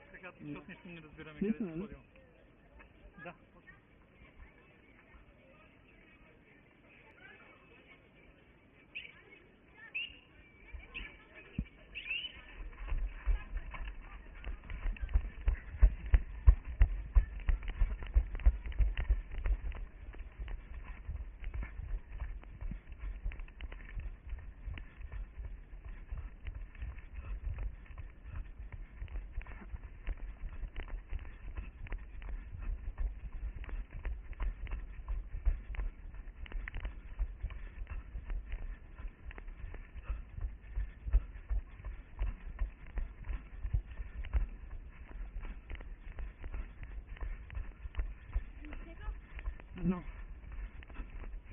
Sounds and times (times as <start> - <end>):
Outside, urban or manmade: 0.0 - 51.5
Run: 0.0 - 51.5.